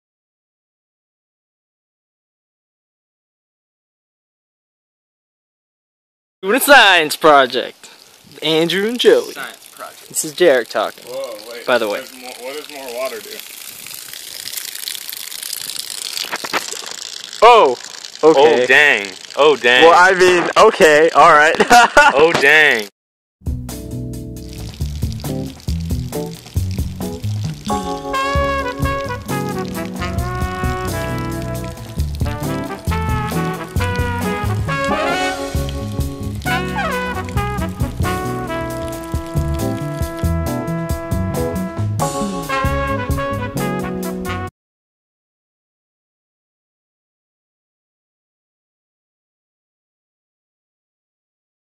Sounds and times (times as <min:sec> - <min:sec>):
Speech: 0:06.4 - 0:07.8, 0:08.4 - 0:13.4, 0:17.4 - 0:22.9
Music: 0:23.4 - 0:44.5.